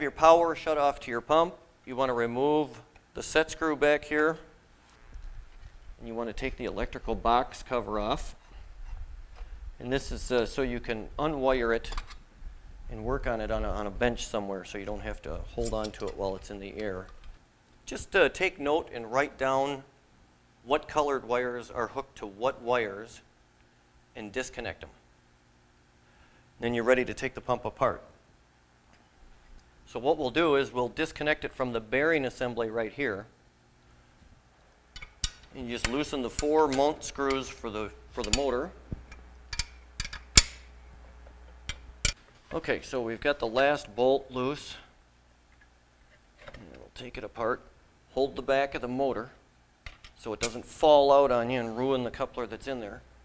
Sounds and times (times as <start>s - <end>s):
Speech: 0.0s - 4.5s, 6.0s - 8.4s, 9.8s - 12.0s, 12.9s - 17.1s, 17.9s - 19.9s, 20.6s - 23.3s, 24.2s - 25.0s, 26.6s - 28.2s, 29.9s - 33.3s, 35.6s - 38.8s, 42.5s - 45.0s, 46.5s - 49.4s, 50.2s - 53.1s.